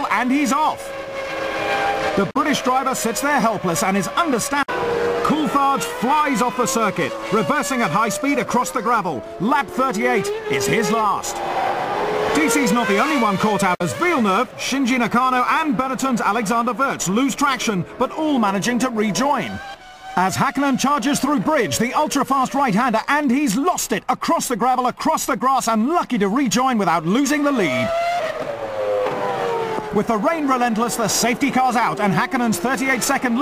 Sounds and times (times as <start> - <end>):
Speech: 0.0 - 0.8, 2.2 - 4.7, 5.3 - 11.4, 12.4 - 19.6, 20.2 - 27.9, 30.0 - 33.4.